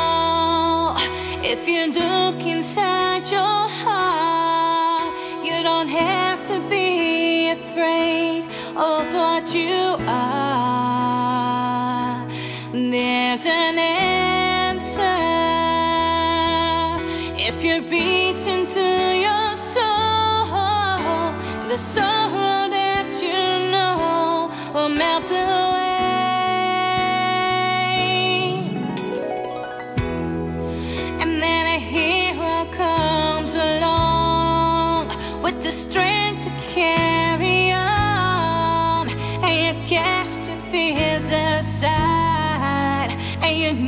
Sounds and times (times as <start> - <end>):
Female singing: 0.0 - 28.9, 31.2 - 43.8
Music: 0.0 - 43.8.